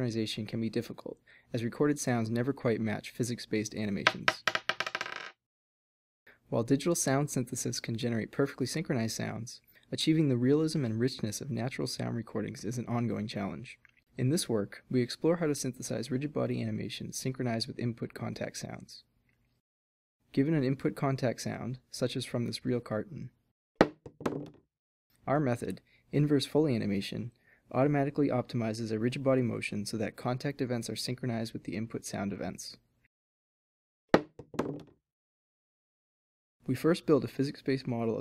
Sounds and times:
Speech: 0:00.0 - 0:04.4, 0:06.5 - 0:19.1, 0:20.3 - 0:23.4, 0:25.2 - 0:32.8, 0:36.6 - 0:38.2.

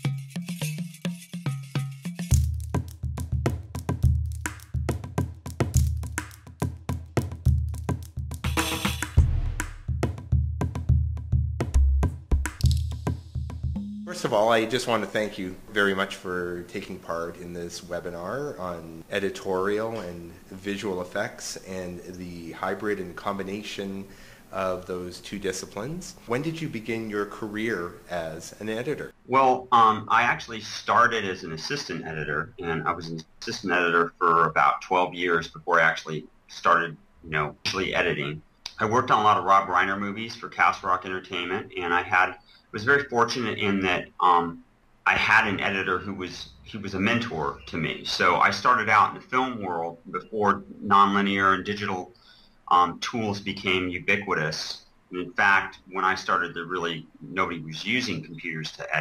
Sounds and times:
Speech: 0:14.1 - 0:52.1, 0:52.7 - 0:59.0.

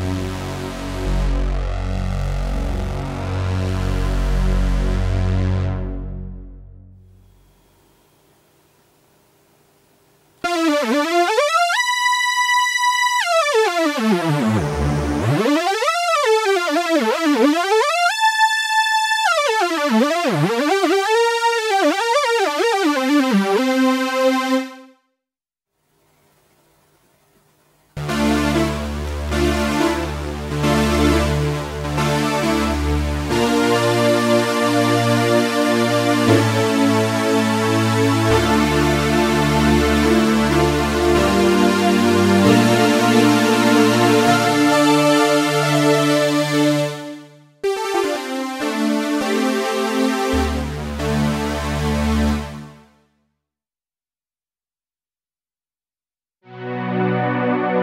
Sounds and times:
Music: 0:00.0 - 0:08.4, 0:10.4 - 0:25.2, 0:28.0 - 0:53.4, 0:56.4 - 0:57.8.

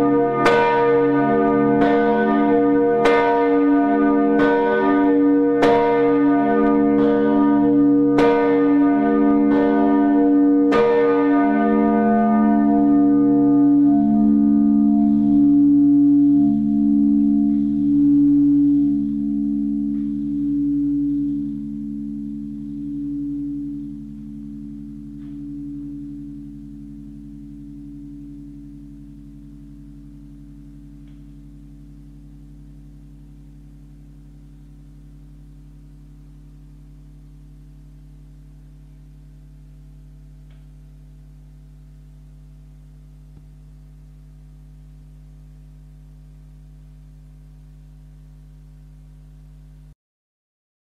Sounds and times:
Singing bowl: 0:00.0 - 0:49.6.

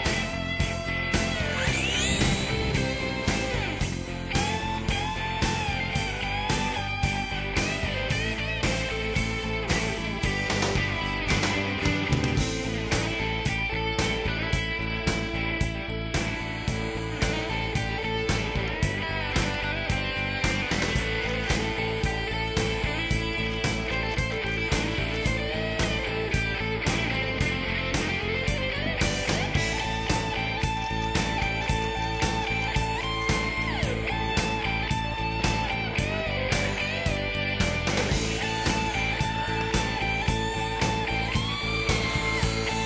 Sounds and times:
Music: 0:00.0 - 0:42.8.

